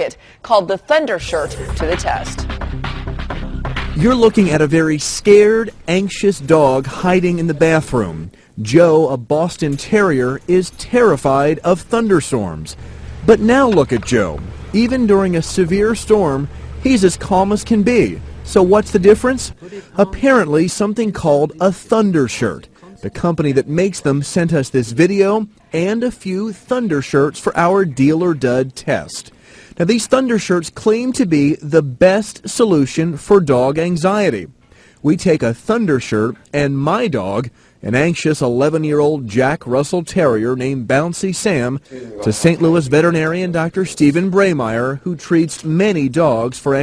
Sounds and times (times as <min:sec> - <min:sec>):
Speech: 0:04.0 - 0:46.8.